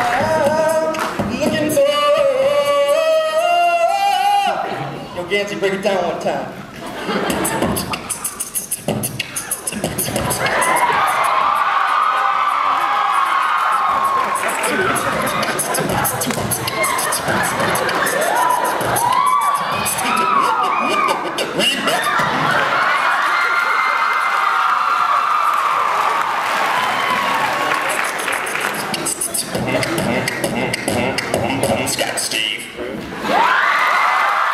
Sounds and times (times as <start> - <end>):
Speech: 4.2 - 6.6.